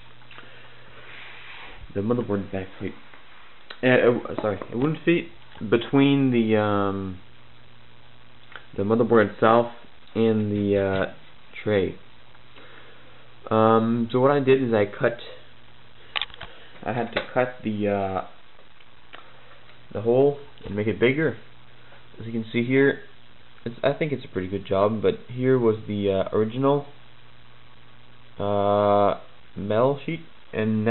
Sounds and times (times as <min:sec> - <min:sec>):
Inside, small room: 0:00.0 - 0:30.9
Speech: 0:01.9 - 0:03.0, 0:03.7 - 0:07.2, 0:08.7 - 0:12.0, 0:13.4 - 0:15.5, 0:16.8 - 0:18.4, 0:19.9 - 0:21.5, 0:22.2 - 0:27.0, 0:28.4 - 0:30.9.